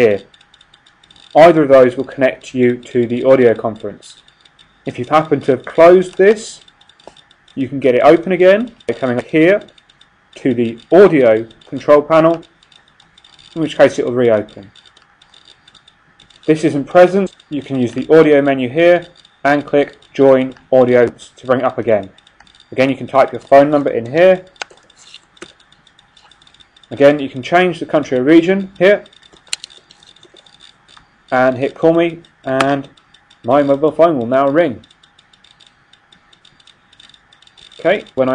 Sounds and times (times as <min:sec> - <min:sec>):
Speech: 0:00.0 - 0:00.3, 0:01.4 - 0:04.2, 0:04.9 - 0:06.6, 0:07.6 - 0:09.7, 0:10.4 - 0:12.4, 0:13.6 - 0:14.7, 0:16.5 - 0:22.1, 0:22.8 - 0:24.5, 0:26.9 - 0:29.1, 0:31.3 - 0:32.9, 0:33.5 - 0:34.8, 0:37.8 - 0:38.3.